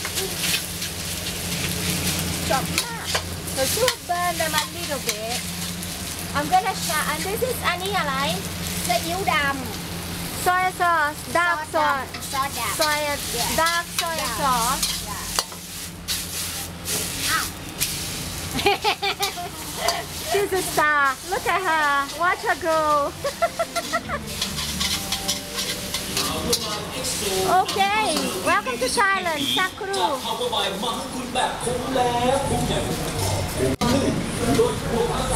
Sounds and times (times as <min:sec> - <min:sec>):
Frying (food): 0:00.0 - 0:35.3
Sizzle: 0:00.0 - 0:35.3.